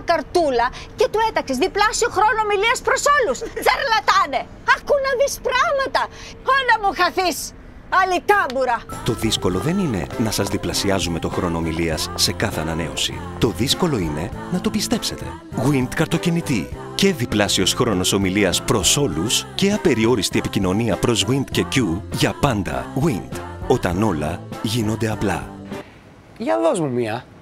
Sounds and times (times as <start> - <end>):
Speech: 0.0 - 25.5
Music: 8.8 - 25.9.